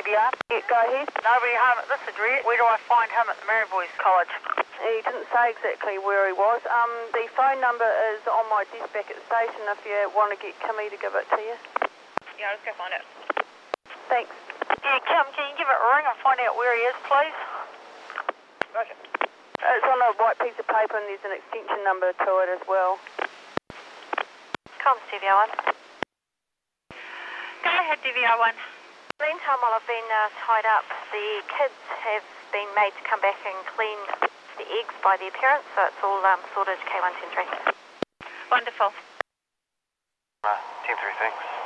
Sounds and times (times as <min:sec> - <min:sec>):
Speech: 0:00.0 - 0:11.6, 0:12.3 - 0:13.1, 0:14.0 - 0:17.7, 0:18.7 - 0:19.0, 0:19.6 - 0:23.0, 0:24.8 - 0:25.6, 0:27.0 - 0:37.7, 0:38.3 - 0:39.1, 0:40.4 - 0:41.6
Radio: 0:00.0 - 0:23.3, 0:24.0 - 0:25.8, 0:26.9 - 0:39.2, 0:40.4 - 0:41.6.